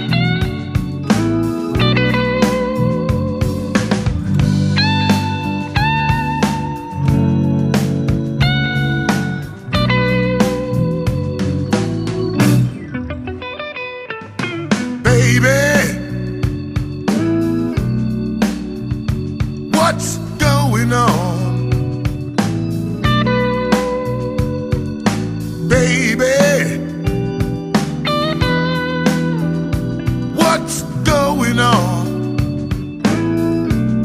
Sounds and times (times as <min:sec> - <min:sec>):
Music: 0:00.0 - 0:34.0.